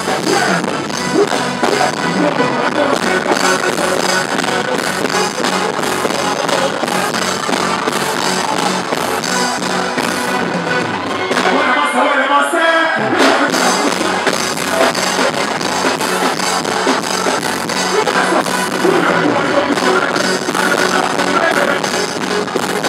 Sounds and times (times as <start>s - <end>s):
Music: 0.0s - 22.8s.